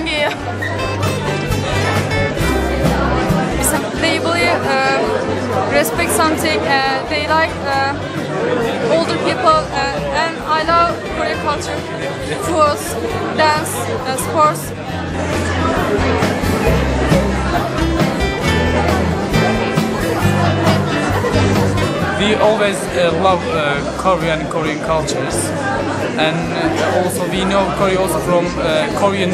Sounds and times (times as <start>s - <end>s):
Music: 0.0s - 29.3s.